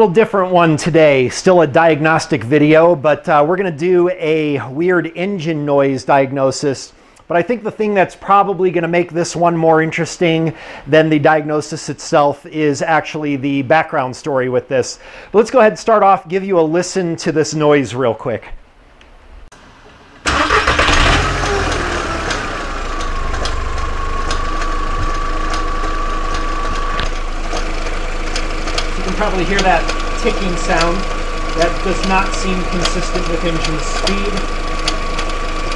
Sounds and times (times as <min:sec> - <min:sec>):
Engine knocking: 0:20.3 - 0:35.7.